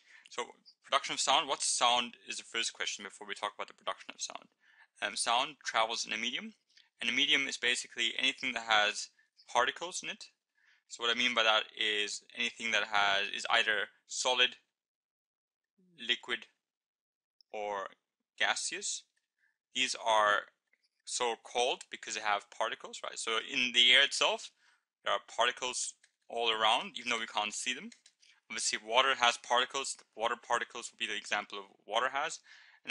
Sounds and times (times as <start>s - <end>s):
Speech: 0.3s - 14.7s, 16.0s - 16.6s, 17.6s - 19.0s, 19.8s - 20.5s, 21.1s - 32.9s.